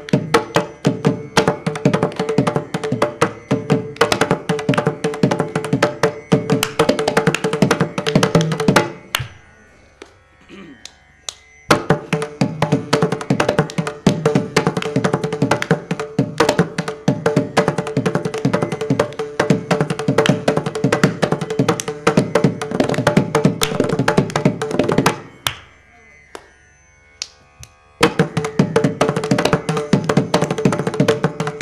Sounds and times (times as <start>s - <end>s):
Music: 0.0s - 31.6s.